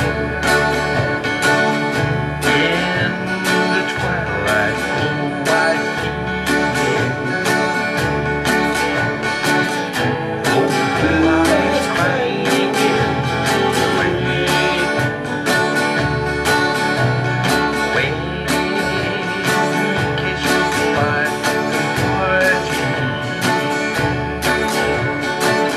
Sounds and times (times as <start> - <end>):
Music: 0.0 - 25.7.